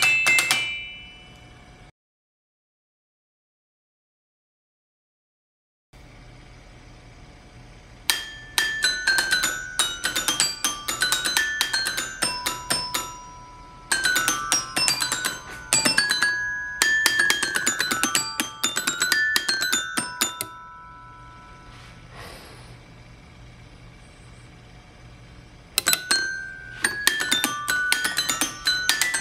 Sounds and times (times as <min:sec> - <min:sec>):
Marimba, xylophone: 0:00.0 - 0:01.4, 0:08.1 - 0:21.8, 0:25.8 - 0:29.2.